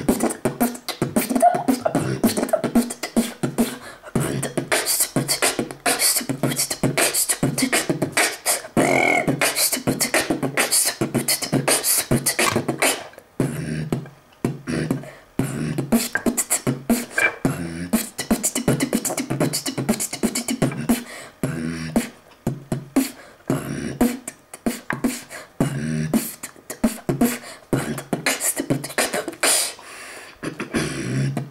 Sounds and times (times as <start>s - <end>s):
Beatboxing: 0.0s - 31.5s.